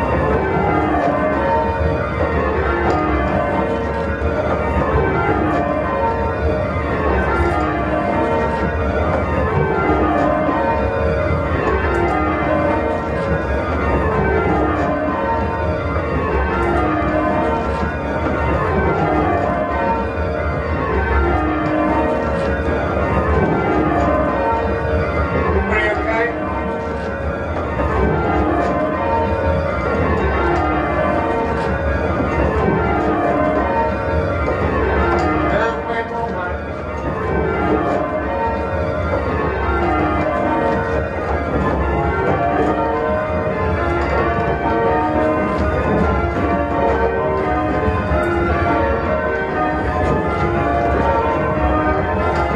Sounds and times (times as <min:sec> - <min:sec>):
Bell: 0:00.0 - 0:52.5.